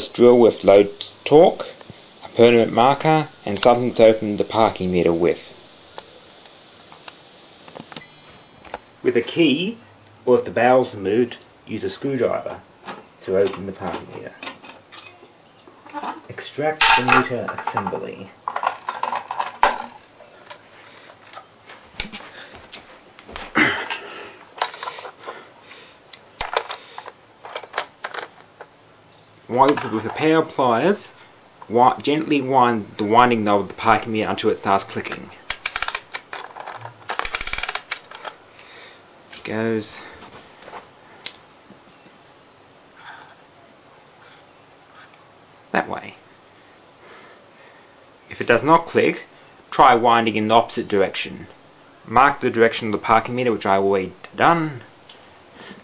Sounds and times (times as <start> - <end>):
Speech: 0.0 - 5.5, 9.0 - 12.6, 13.2 - 14.4, 16.3 - 18.4, 29.5 - 35.4, 39.4 - 40.1, 45.7 - 46.2, 48.3 - 51.5, 52.1 - 54.9.